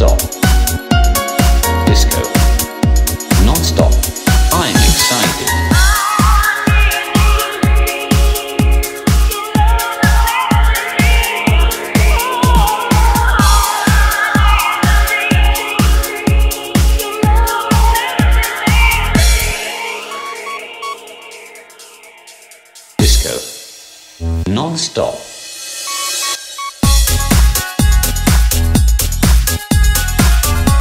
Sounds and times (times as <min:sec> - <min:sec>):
Disco: 0:00.0 - 0:23.6, 0:25.7 - 0:30.8
Electronica: 0:00.0 - 0:24.5, 0:25.8 - 0:30.8.